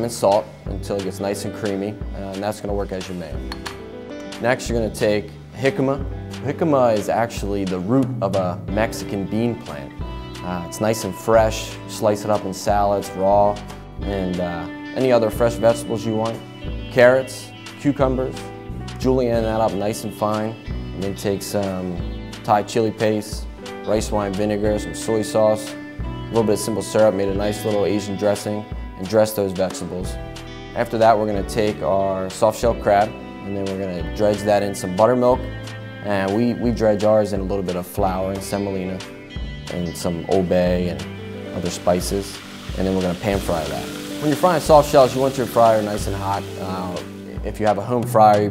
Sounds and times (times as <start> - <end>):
Frying (food): 41.6 - 47.4.